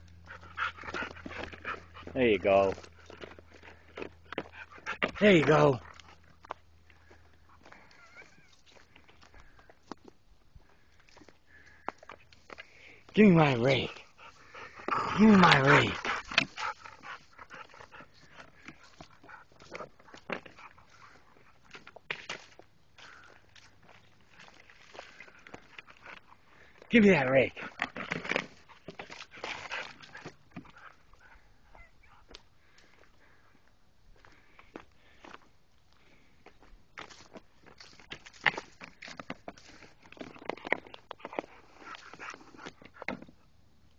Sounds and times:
Dog: 0.1 - 8.8, 13.6 - 21.9, 27.6 - 33.4, 37.9 - 43.5.

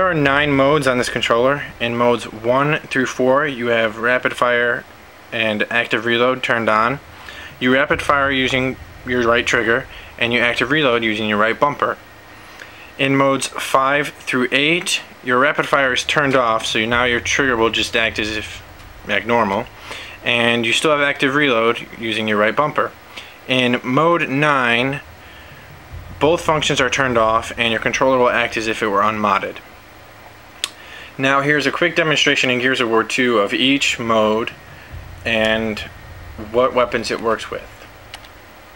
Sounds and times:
Speech: 0.0 - 12.0, 12.9 - 25.1, 26.0 - 29.6, 31.2 - 37.9.

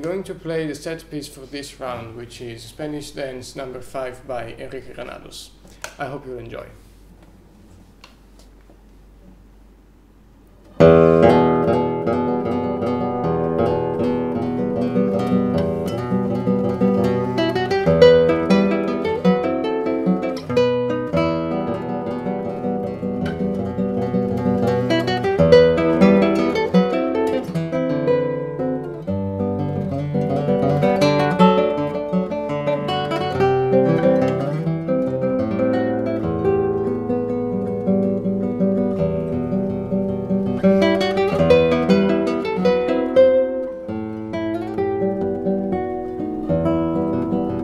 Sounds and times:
Strum: 10.6 - 47.6.

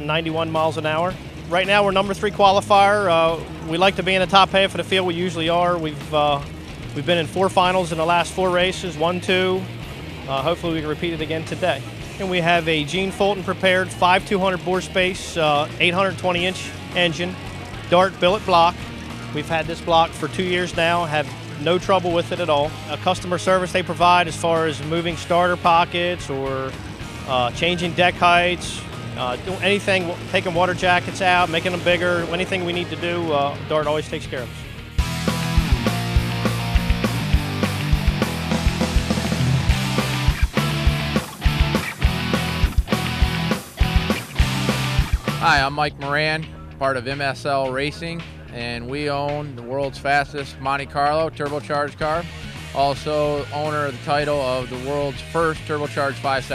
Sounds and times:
Speech: 0.0 - 9.7, 10.3 - 18.8, 19.4 - 34.7, 45.3 - 56.5
Music: 0.0 - 56.5
Vehicle: 0.0 - 56.5.

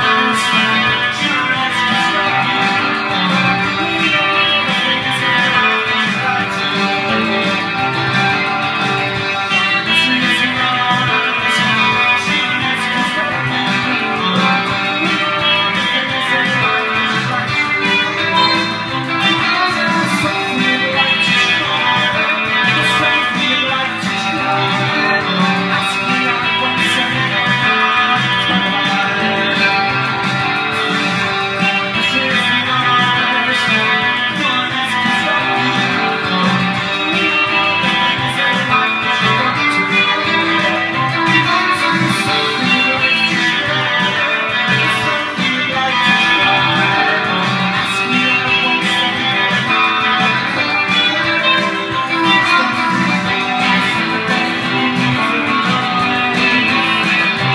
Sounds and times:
Acoustic guitar: 0.0 - 57.5
Electric guitar: 0.0 - 57.5.

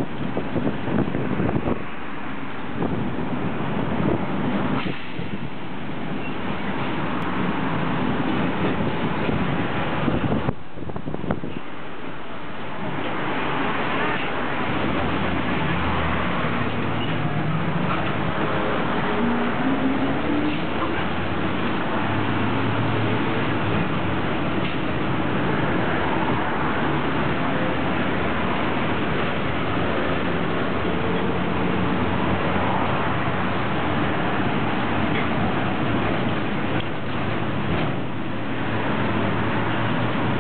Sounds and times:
Bus: 0.0 - 40.4.

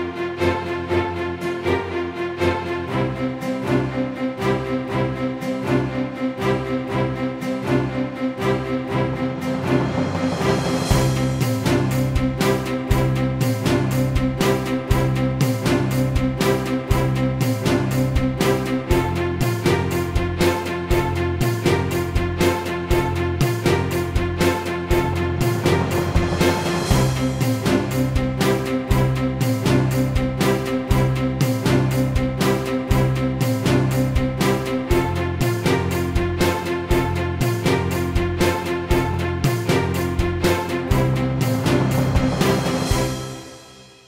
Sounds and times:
Music: 0.0 - 44.0.

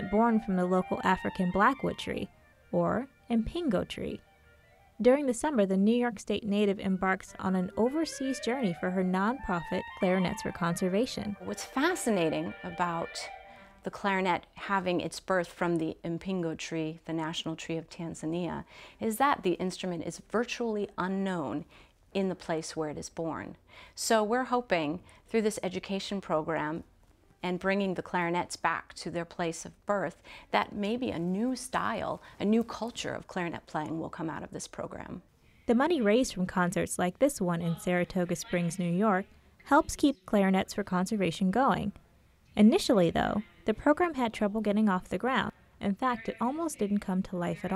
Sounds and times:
Speech: 0.0 - 4.2, 5.0 - 42.0, 42.6 - 47.7
Independent music: 0.0 - 14.3.

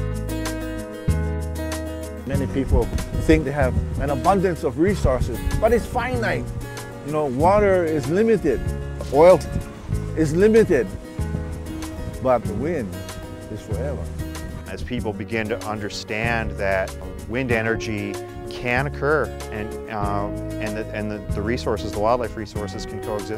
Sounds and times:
Music: 0.0 - 23.3
Speech: 2.3 - 6.4, 7.1 - 9.5, 10.2 - 10.9, 12.2 - 14.0, 14.7 - 23.3.

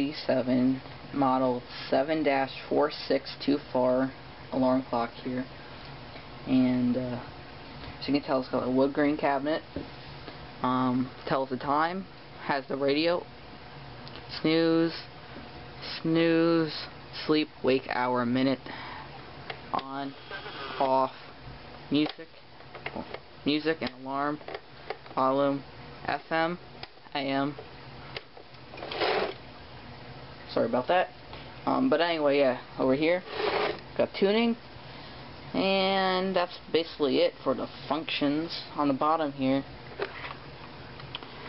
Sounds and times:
Speech: 0.0 - 5.5, 6.5 - 7.3, 8.0 - 9.7, 10.6 - 13.3, 14.3 - 15.1, 15.8 - 18.6, 19.7 - 20.2, 20.8 - 21.2, 21.9 - 24.4, 25.2 - 27.6, 30.5 - 33.3, 34.0 - 34.6, 35.5 - 39.7.

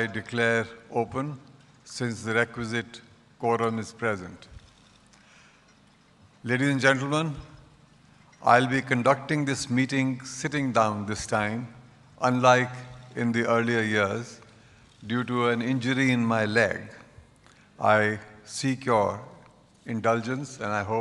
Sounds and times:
Male speech, man speaking: 0.0 - 4.5, 6.4 - 7.6, 8.4 - 14.4, 15.0 - 17.1, 17.8 - 21.0
Narration, monologue: 0.0 - 21.0.

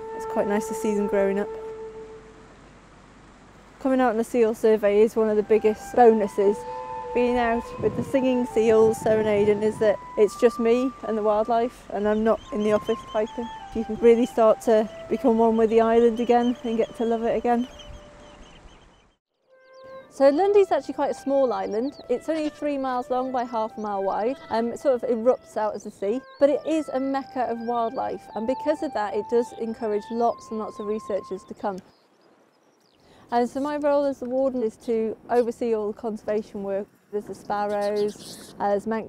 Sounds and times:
Music: 0.0 - 2.5, 4.0 - 18.3, 19.3 - 31.8
Speech: 0.2 - 1.5, 3.8 - 6.6, 7.2 - 17.7, 20.2 - 31.8, 33.3 - 39.0.

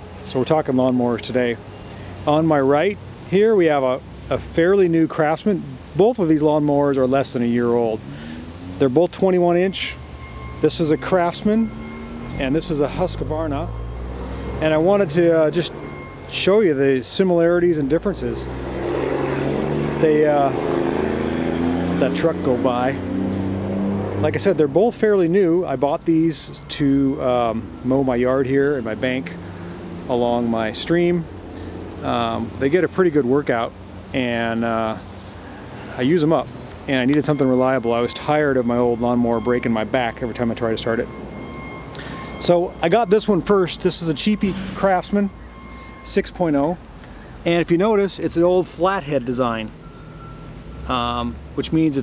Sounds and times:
Speech: 0.2 - 1.6, 2.2 - 8.0, 8.8 - 10.0, 10.6 - 11.7, 12.4 - 13.8, 14.6 - 18.5, 20.0 - 20.6, 22.0 - 23.0, 24.2 - 29.4, 30.1 - 31.3, 32.0 - 35.0, 35.9 - 41.1, 42.4 - 45.3, 46.0 - 46.8, 47.4 - 49.7, 50.9 - 52.0.

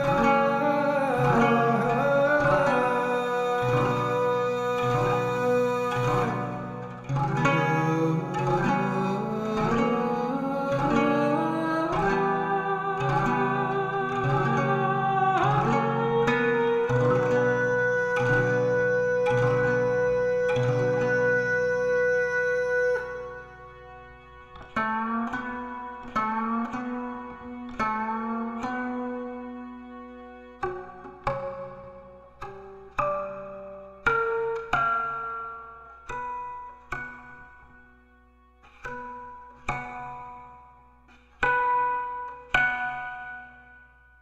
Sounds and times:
Plucked string instrument: 0.0 - 44.2.

